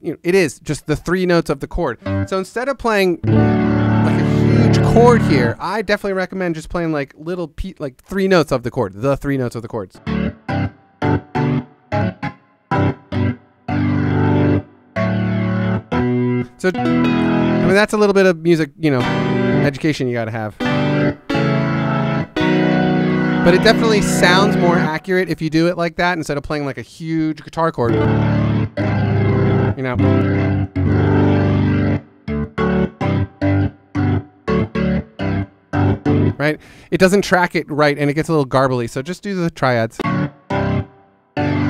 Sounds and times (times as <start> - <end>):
Speech: 0.0 - 3.3, 4.1 - 10.0, 16.6 - 16.8, 17.6 - 20.6, 23.5 - 28.0, 29.8 - 30.2, 36.4 - 40.0
Guitar: 2.0 - 2.5, 3.2 - 5.6, 10.0 - 18.0, 18.9 - 25.1, 27.8 - 36.8, 40.0 - 41.7.